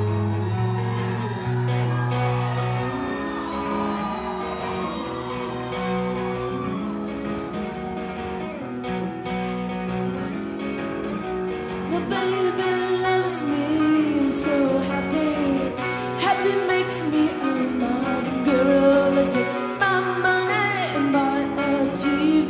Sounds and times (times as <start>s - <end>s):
Music: 0.0s - 22.4s.